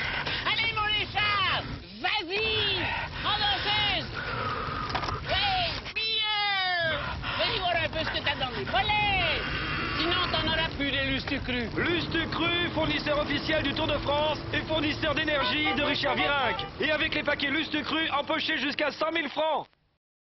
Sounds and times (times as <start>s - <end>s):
Speech: 10.0s - 19.7s.